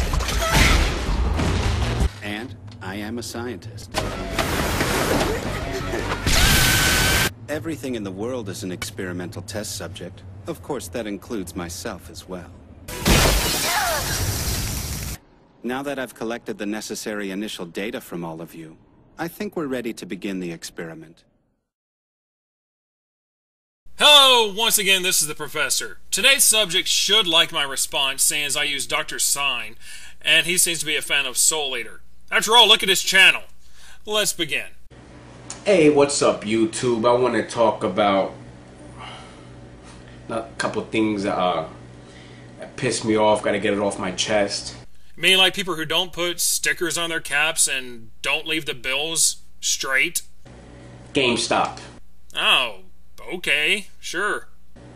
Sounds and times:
Speech: 2.2s - 3.9s, 7.5s - 12.5s, 15.6s - 21.2s, 24.0s - 33.5s, 34.1s - 34.8s, 35.6s - 38.4s, 40.3s - 41.8s, 42.6s - 50.3s, 51.1s - 54.5s.

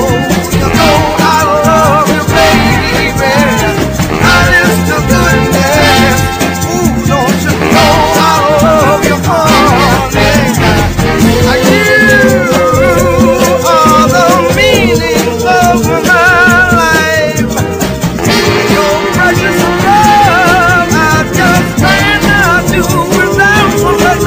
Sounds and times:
Salsa music: 0.0s - 24.2s.

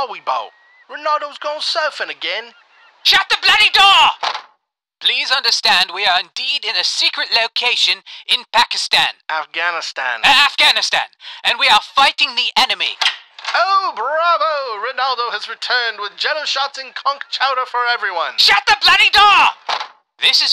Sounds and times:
Speech: 0.0s - 4.2s, 5.0s - 13.0s, 13.6s - 19.6s, 20.2s - 20.5s.

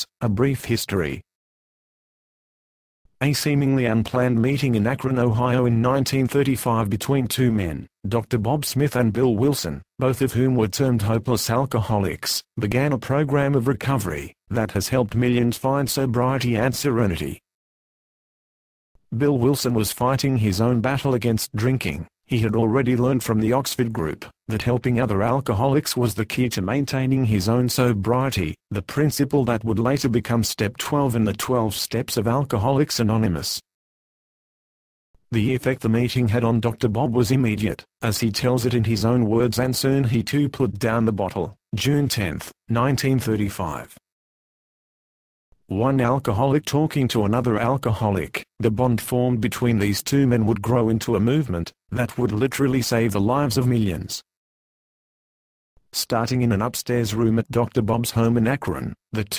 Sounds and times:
Speech: 0.0s - 1.3s, 3.2s - 17.5s, 19.1s - 33.7s, 35.3s - 44.0s, 45.7s - 54.3s, 56.0s - 59.3s.

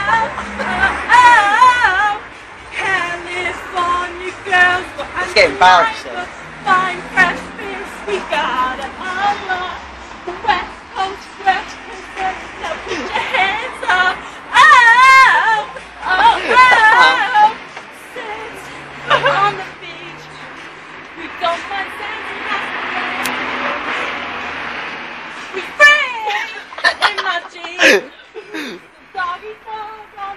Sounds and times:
Female singing: 0.0s - 24.0s, 25.5s - 30.3s
Vehicle: 0.0s - 30.3s.

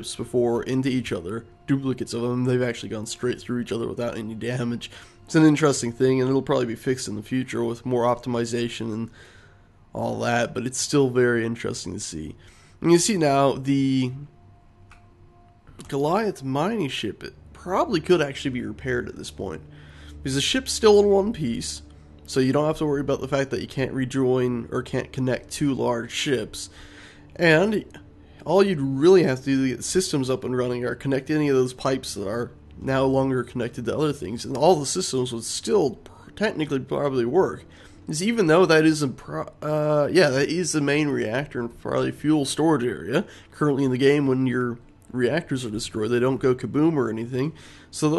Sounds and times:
Speech: 0.0s - 9.2s, 10.0s - 14.4s, 15.8s - 19.6s, 20.2s - 26.8s, 27.4s - 48.1s.

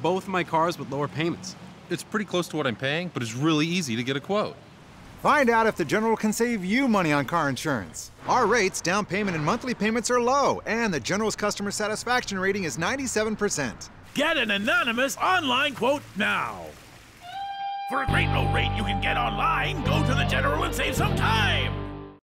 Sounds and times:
Speech: 0.0s - 4.6s, 5.2s - 16.8s, 17.9s - 21.7s
Music: 17.3s - 22.2s.

